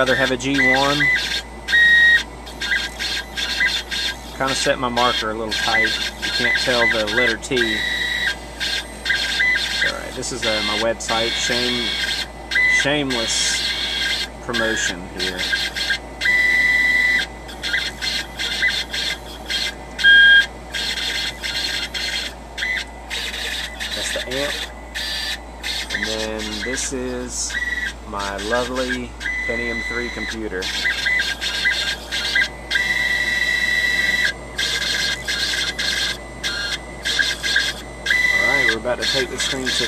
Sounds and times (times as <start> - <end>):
Speech: 0.0 - 1.1, 4.4 - 7.8, 9.8 - 11.9, 12.8 - 13.6, 14.5 - 15.4, 24.0 - 24.6, 25.9 - 27.5, 28.1 - 30.7, 38.4 - 39.8.